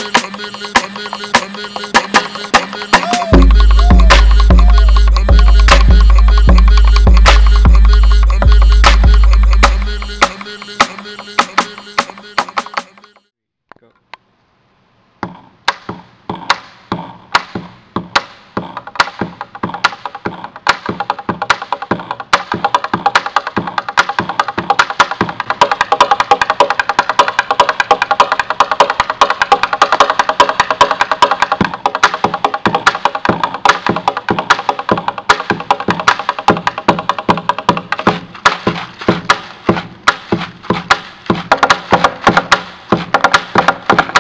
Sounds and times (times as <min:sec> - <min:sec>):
Music: 0:00.0 - 0:13.3, 0:15.7 - 0:44.2.